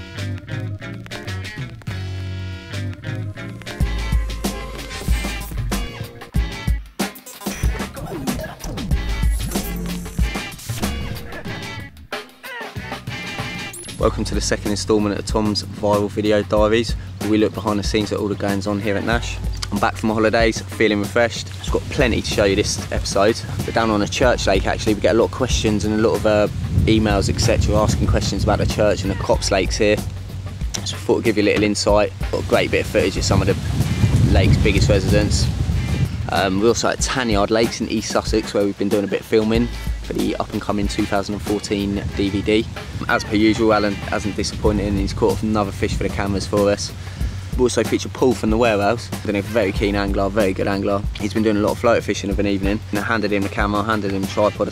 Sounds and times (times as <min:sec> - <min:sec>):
Music: 0:00.0 - 0:54.7
Speech: 0:14.0 - 0:30.0, 0:30.8 - 0:33.7, 0:34.3 - 0:35.5, 0:36.3 - 0:46.9, 0:47.6 - 0:54.7.